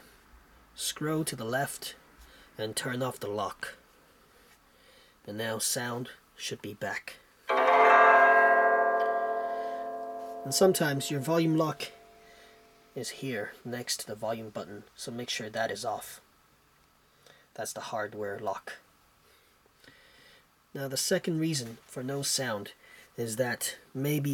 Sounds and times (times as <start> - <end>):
Zither: 7.5 - 12.6.